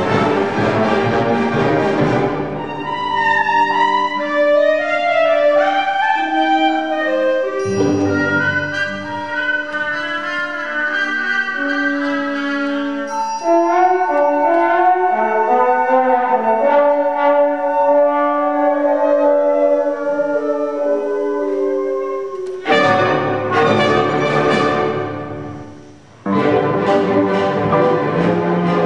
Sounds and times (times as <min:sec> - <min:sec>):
Inside, large room or hall: 0:00.0 - 0:28.8
Orchestra: 0:00.0 - 0:28.8.